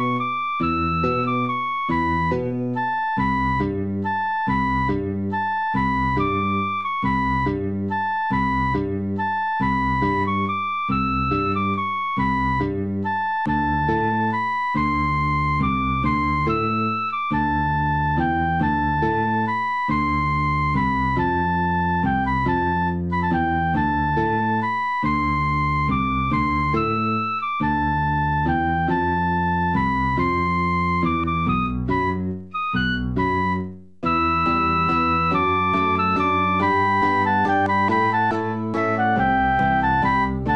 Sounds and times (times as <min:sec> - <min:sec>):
Music: 0:00.0 - 0:40.5.